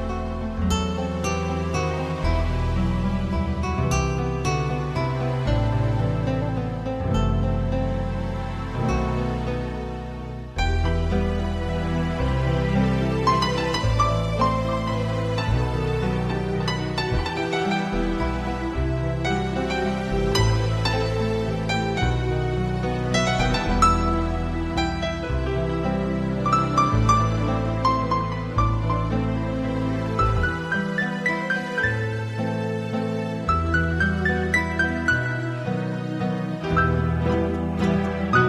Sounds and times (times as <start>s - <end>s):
Music: 0.0s - 38.4s.